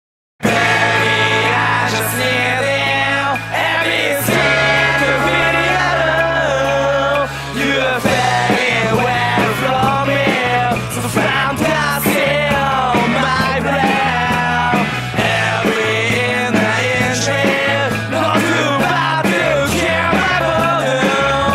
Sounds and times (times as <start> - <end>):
Independent music: 0.4 - 21.5.